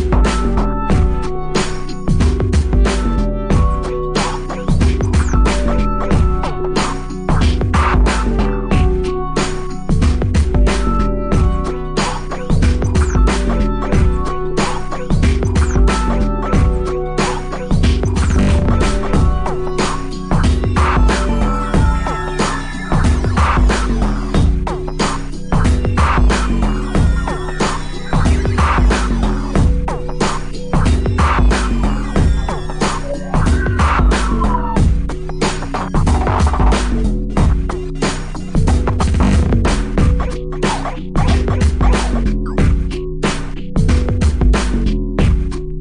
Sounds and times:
Music: 0.0s - 45.8s.

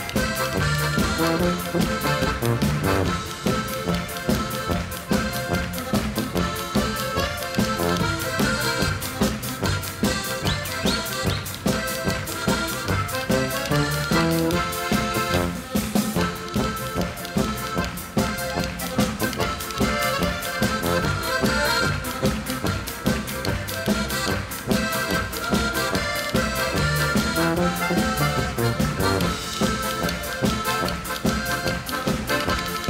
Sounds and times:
Music: 0.0s - 32.8s.

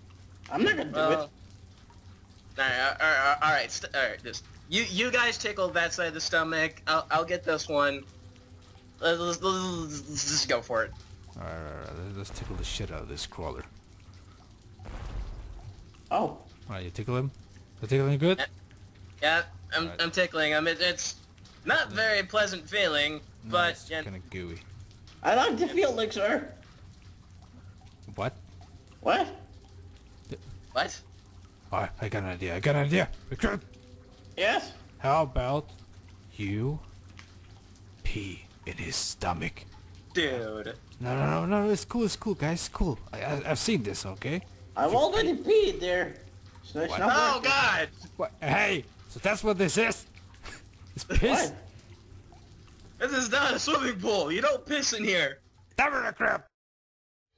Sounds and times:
Speech: 9.0s - 13.7s, 40.2s - 50.1s, 53.0s - 56.5s.

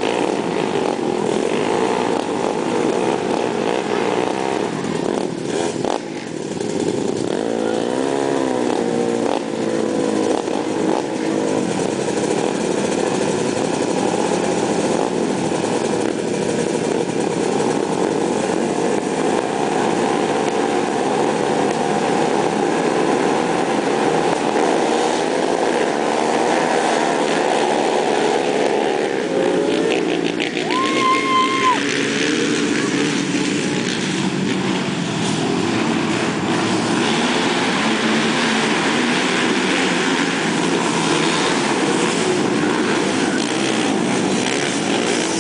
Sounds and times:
Outside, urban or manmade: 0.0s - 45.4s
Vehicle: 0.0s - 45.4s.

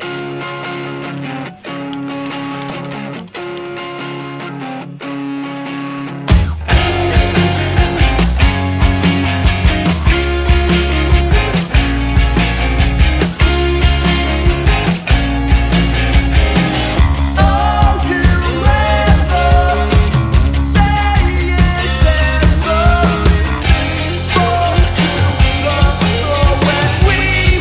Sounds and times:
Music: 0.0s - 27.6s.

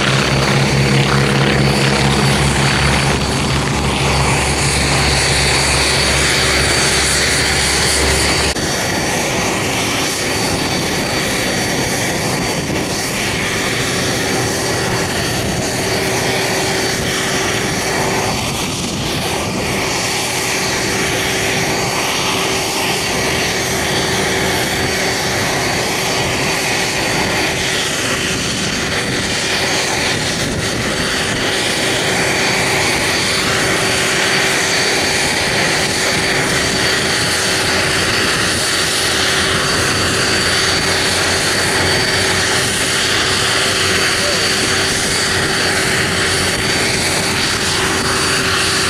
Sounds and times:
Fixed-wing aircraft, airplane: 0.0s - 48.8s.

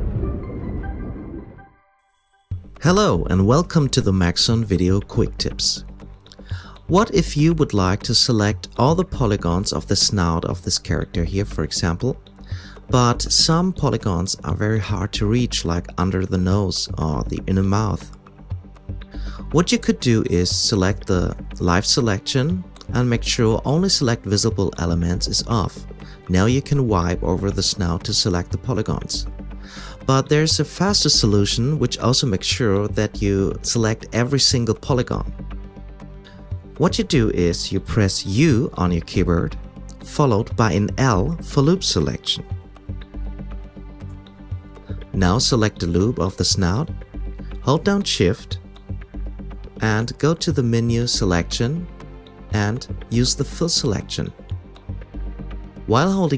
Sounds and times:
Music: 0.0s - 56.3s
Speech: 2.8s - 5.8s, 6.8s - 12.2s, 12.9s - 18.2s, 19.4s - 29.3s, 30.0s - 35.3s, 36.8s - 42.5s, 45.1s - 47.0s, 47.6s - 48.6s, 49.8s - 51.9s, 52.5s - 54.4s, 55.9s - 56.3s.

